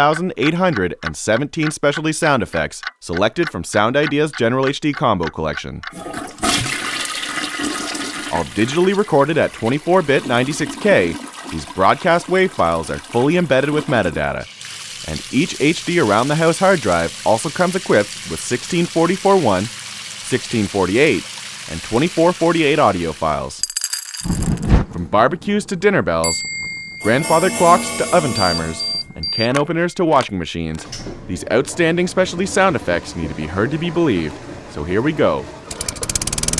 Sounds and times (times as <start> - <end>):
Speech: 0.0 - 5.8, 8.4 - 14.5, 15.1 - 19.7, 20.3 - 23.6, 24.9 - 26.3, 27.0 - 35.5
Toilet flush: 6.0 - 23.4, 31.6 - 35.8.